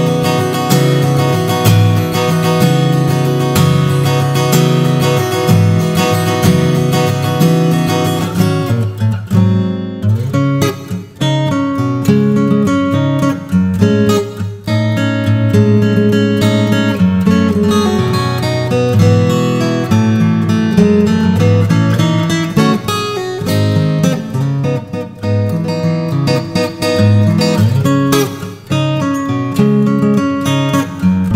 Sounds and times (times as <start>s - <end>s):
Music: 0.0s - 31.3s.